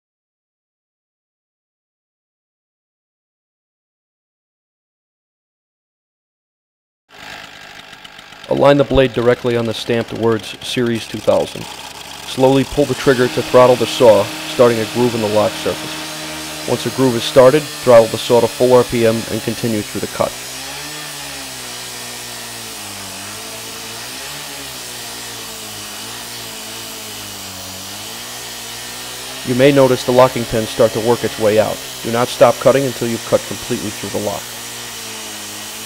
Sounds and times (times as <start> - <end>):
Power tool: 7.1 - 35.8
Speech: 8.5 - 11.7, 12.3 - 16.0, 16.6 - 20.4, 29.4 - 34.4.